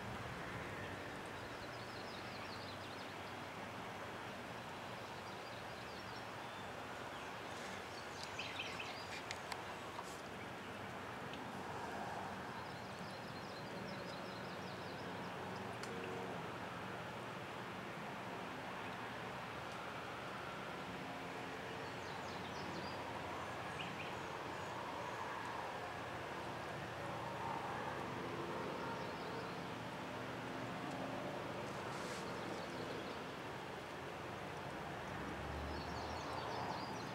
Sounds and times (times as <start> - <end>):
Outside, rural or natural: 0.0 - 37.1.